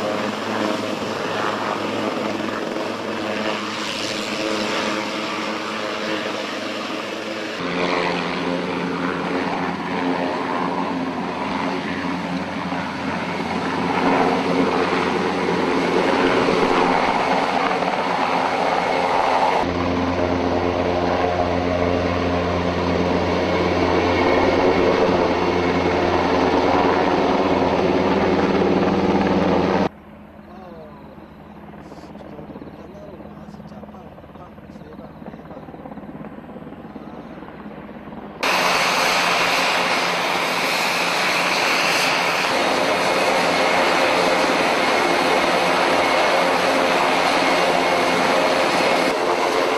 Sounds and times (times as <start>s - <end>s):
Aircraft engine: 0.0s - 49.7s
Helicopter: 0.0s - 49.7s.